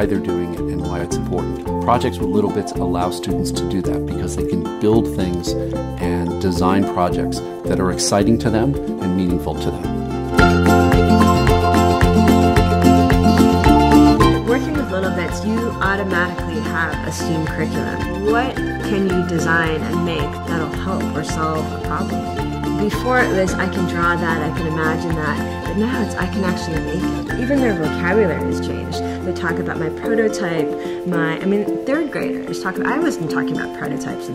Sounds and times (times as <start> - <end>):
Speech: 0.0 - 9.9, 14.5 - 22.1, 22.8 - 34.3
Music: 0.0 - 34.3.